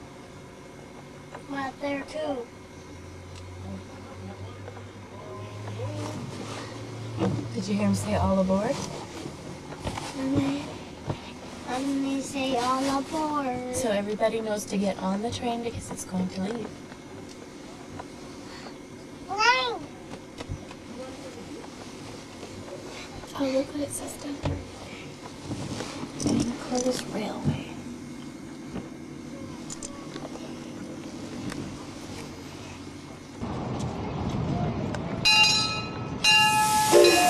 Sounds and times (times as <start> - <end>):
Speech: 11.7 - 16.7.